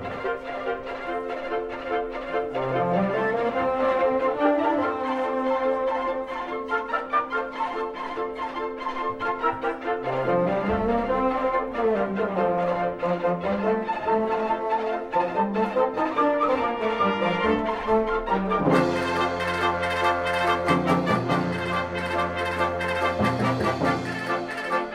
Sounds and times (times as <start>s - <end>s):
Orchestra: 0.0s - 24.9s
Plucked string instrument: 0.0s - 24.9s.